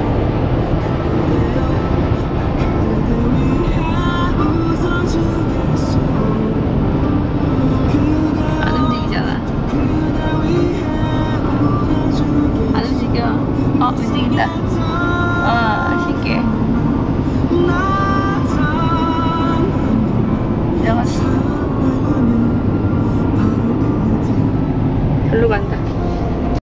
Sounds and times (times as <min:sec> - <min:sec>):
Music: 0:00.0 - 0:26.6
Truck: 0:00.0 - 0:26.6
Speech: 0:08.6 - 0:09.4, 0:12.8 - 0:14.6, 0:15.5 - 0:16.4, 0:25.3 - 0:25.8.